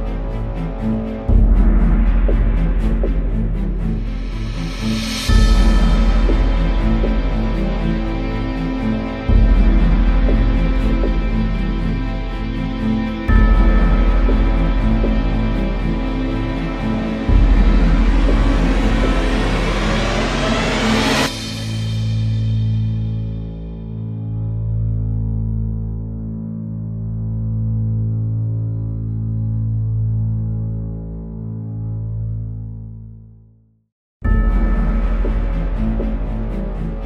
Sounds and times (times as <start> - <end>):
Music: 0.0 - 37.0.